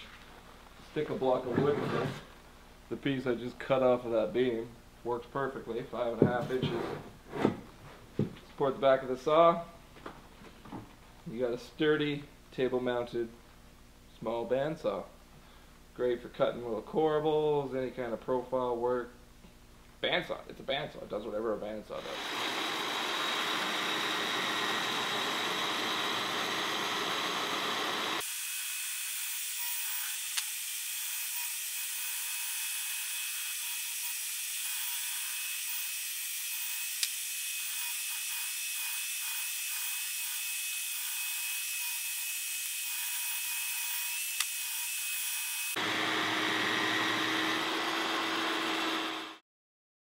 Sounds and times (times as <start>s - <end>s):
Speech: 0.8s - 2.2s, 2.9s - 6.9s, 8.6s - 9.8s, 11.3s - 13.4s, 14.2s - 15.2s, 16.0s - 19.2s, 20.0s - 22.2s.